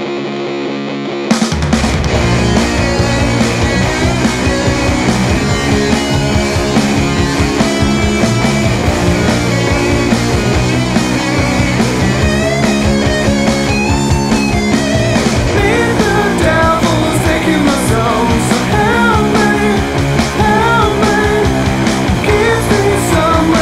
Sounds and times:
Progressive rock: 0:00.0 - 0:23.6.

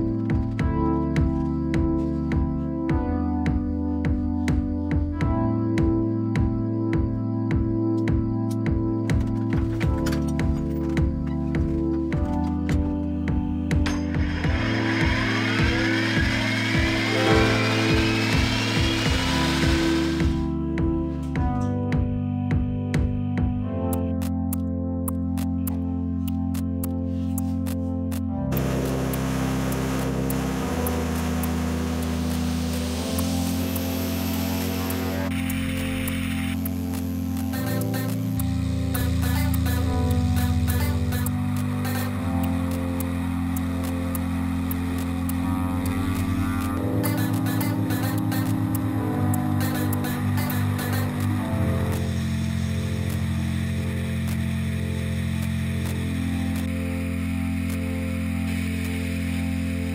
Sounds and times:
Music: 0:00.0 - 0:59.9.

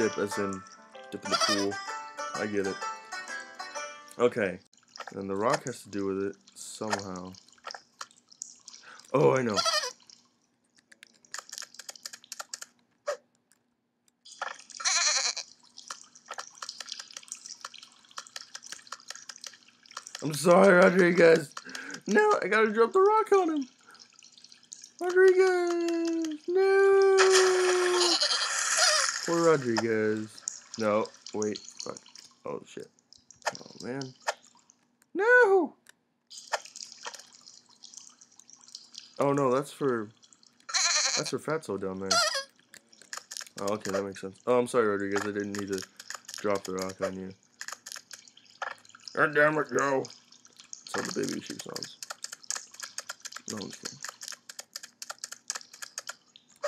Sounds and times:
Speech: 0:00.0 - 0:01.8, 0:02.4 - 0:02.8, 0:04.2 - 0:07.4, 0:09.1 - 0:09.6, 0:20.2 - 0:23.7, 0:25.0 - 0:28.2, 0:29.3 - 0:32.9, 0:33.6 - 0:34.1, 0:35.2 - 0:35.8, 0:39.2 - 0:40.1, 0:41.2 - 0:42.2, 0:43.6 - 0:45.8, 0:46.4 - 0:47.4, 0:49.2 - 0:50.1, 0:50.9 - 0:52.0, 0:53.5 - 0:54.0
Sheep: 0:14.8 - 0:15.5, 0:40.7 - 0:41.3.

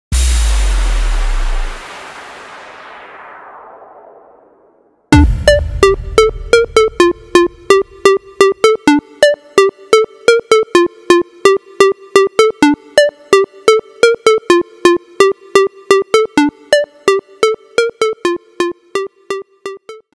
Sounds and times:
Music: 0:05.1 - 0:20.1.

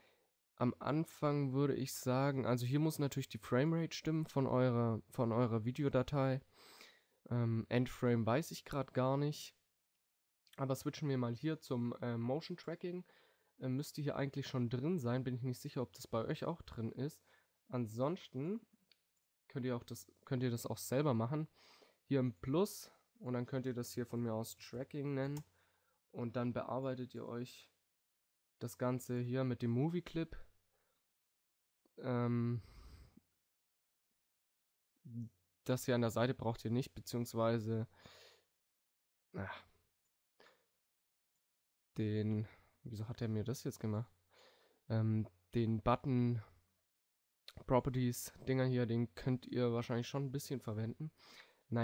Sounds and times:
Speech: 0:00.6 - 0:06.5, 0:07.3 - 0:09.6, 0:10.5 - 0:18.7, 0:19.5 - 0:21.5, 0:22.1 - 0:25.5, 0:26.2 - 0:27.8, 0:28.6 - 0:30.5, 0:32.0 - 0:32.6, 0:35.1 - 0:37.9, 0:39.4 - 0:39.7, 0:42.0 - 0:44.1, 0:44.9 - 0:46.5, 0:47.5 - 0:51.8.

